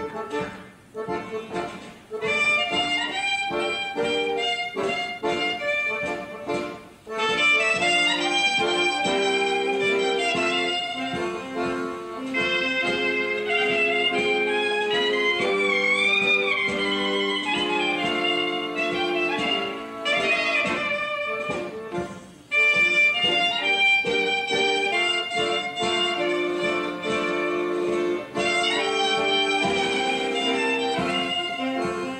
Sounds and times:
Wedding music: 0.0 - 32.1.

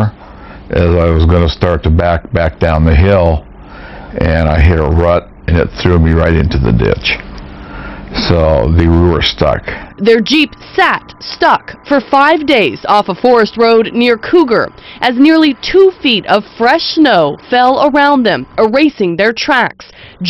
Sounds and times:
Speech: 0.0 - 3.5, 4.2 - 7.2, 8.2 - 20.2.

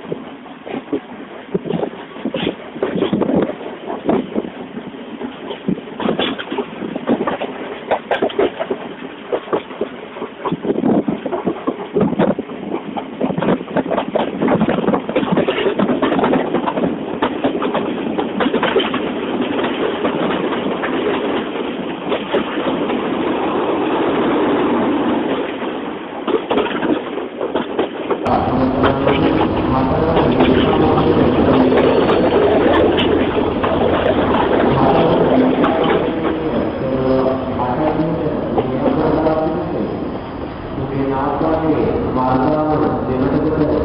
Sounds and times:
Speech: 28.3 - 32.8, 33.7 - 39.9, 40.8 - 43.8.

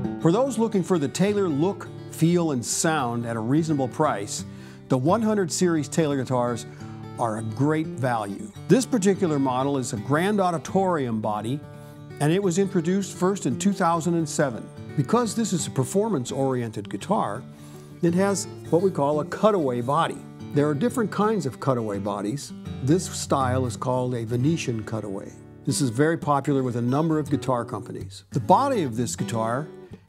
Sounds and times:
Strum: 0.0 - 27.8
Speech: 0.2 - 11.6, 12.2 - 29.8.

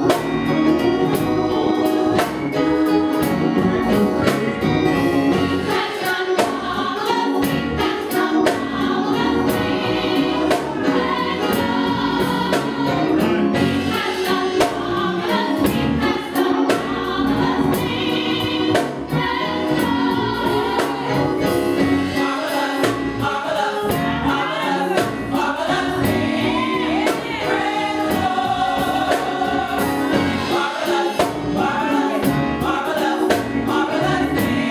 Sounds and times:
Choir: 5.3 - 34.7.

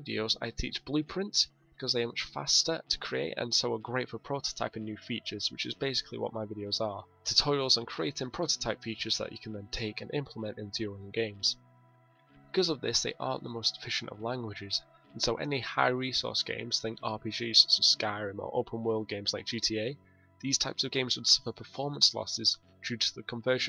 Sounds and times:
Speech: 0.0 - 11.6, 12.5 - 23.6
Music: 0.0 - 23.6.

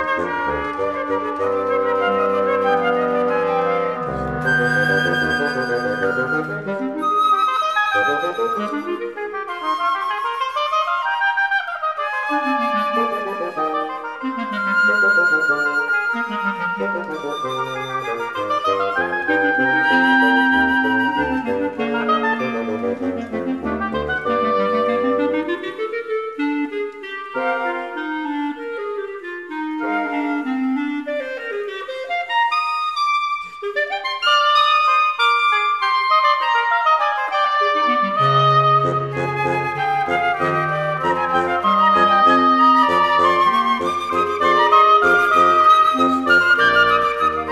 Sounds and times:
Clarinet: 0.0 - 47.5
Flute: 0.0 - 47.5.

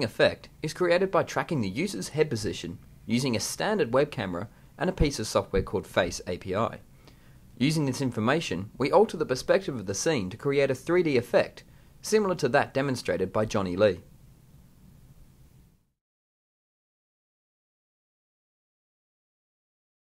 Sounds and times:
Speech: 0.0 - 6.8, 7.6 - 14.1.

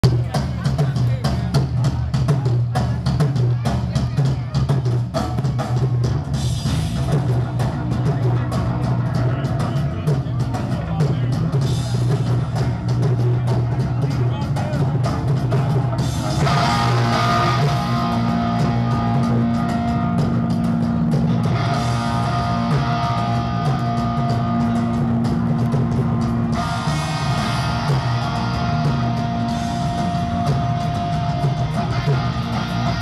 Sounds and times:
Speech: 0.0 - 6.3, 6.9 - 19.4
Music: 0.0 - 33.0.

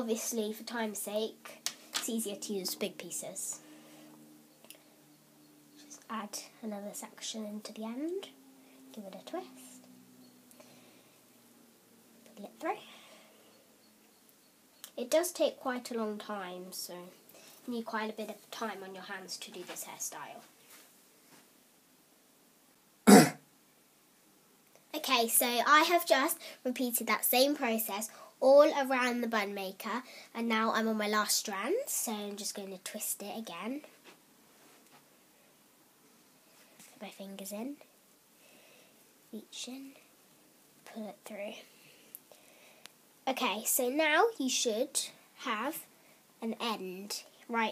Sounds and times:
Speech: 0.0 - 3.6, 5.8 - 9.8, 12.3 - 12.9, 14.9 - 20.5, 24.9 - 34.0, 36.9 - 37.9, 39.3 - 40.0, 40.8 - 41.7, 43.3 - 47.7
Inside, small room: 0.0 - 47.7.

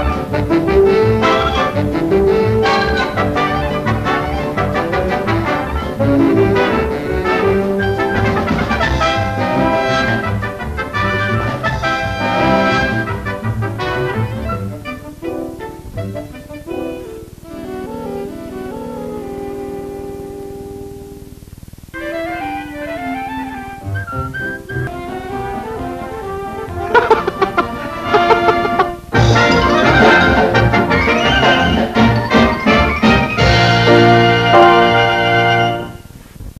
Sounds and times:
Music: 0.0 - 36.2.

